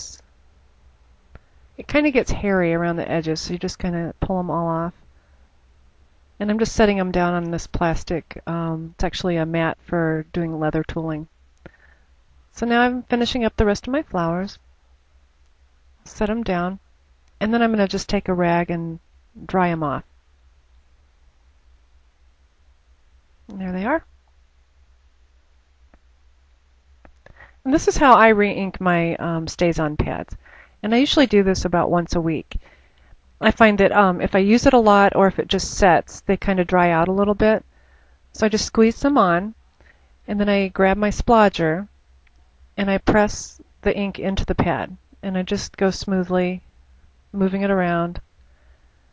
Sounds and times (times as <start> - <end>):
Speech: 0.0 - 0.2, 1.8 - 5.0, 6.4 - 11.3, 12.6 - 14.6, 16.1 - 16.8, 17.4 - 20.0, 23.5 - 24.0, 27.6 - 32.6, 33.4 - 37.6, 38.4 - 39.6, 40.3 - 41.9, 42.8 - 46.6, 47.4 - 48.2.